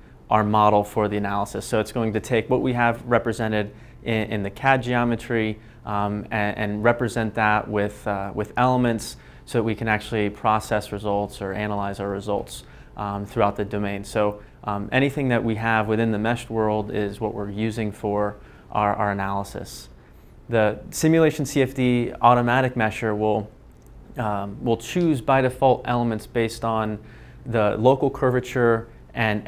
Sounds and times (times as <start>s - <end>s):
Speech: 0.3s - 29.4s.